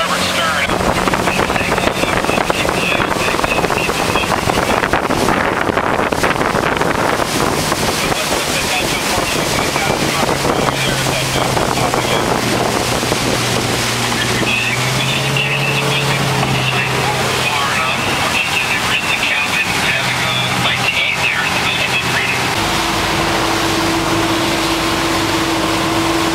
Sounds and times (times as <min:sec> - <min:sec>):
Speech: 0:00.0 - 0:04.9, 0:08.0 - 0:12.4, 0:14.0 - 0:22.5
Sailboat, sailing ship: 0:00.0 - 0:26.3.